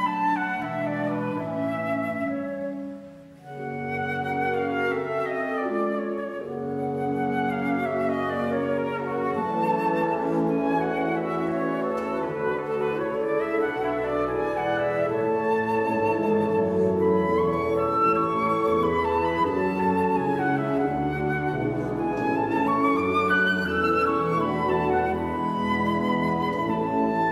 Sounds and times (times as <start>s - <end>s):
Flute: 0.0s - 27.3s.